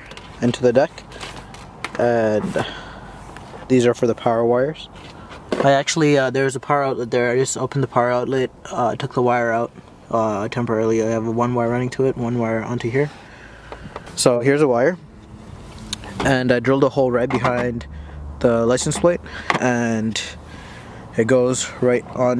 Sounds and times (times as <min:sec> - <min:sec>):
Speech: 0:00.4 - 0:01.0, 0:02.0 - 0:02.8, 0:03.7 - 0:04.9, 0:05.6 - 0:13.2, 0:14.2 - 0:15.0, 0:16.2 - 0:20.4, 0:21.2 - 0:22.3.